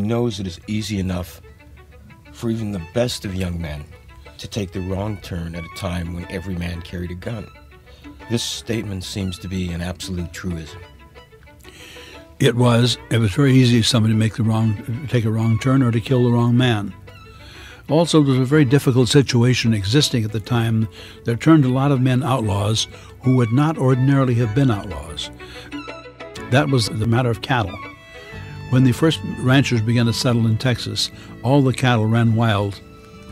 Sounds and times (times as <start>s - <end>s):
Speech: 0.0s - 1.4s, 2.4s - 7.5s, 8.3s - 10.8s, 12.4s - 17.0s, 17.9s - 25.3s, 26.4s - 27.8s, 28.7s - 32.8s
Music: 0.0s - 33.3s.